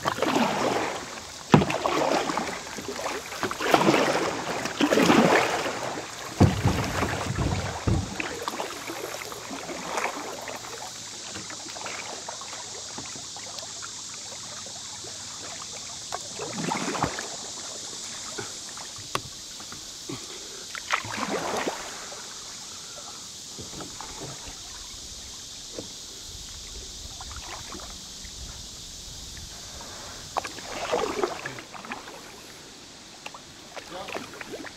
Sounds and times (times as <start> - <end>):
Rowboat, canoe, kayak: 0.0 - 34.7.